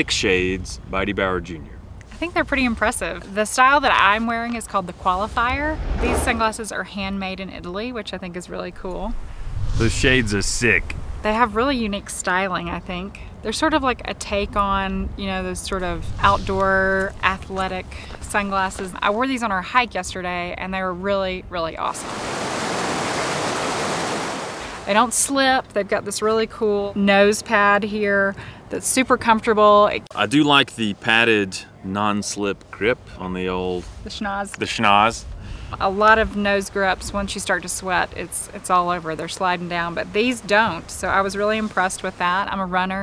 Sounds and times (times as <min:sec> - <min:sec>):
Pink noise: 0:08.7 - 0:12.0, 0:21.9 - 0:25.1
Waterfall: 0:22.0 - 0:24.9.